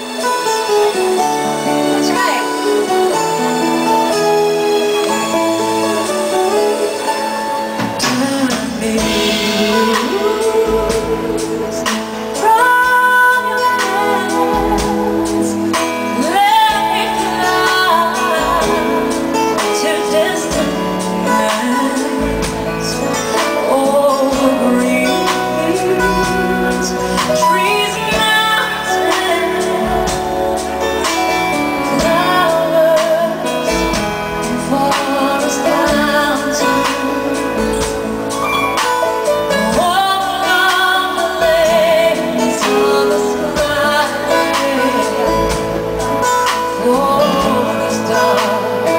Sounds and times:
Music: 0.0 - 48.9.

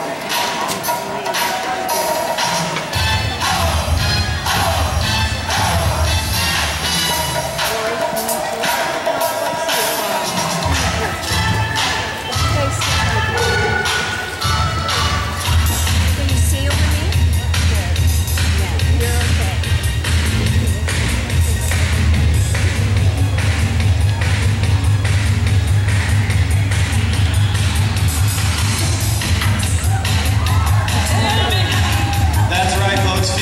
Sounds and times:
Music: 0.0 - 33.4
Speech: 6.9 - 22.2, 31.0 - 33.4.

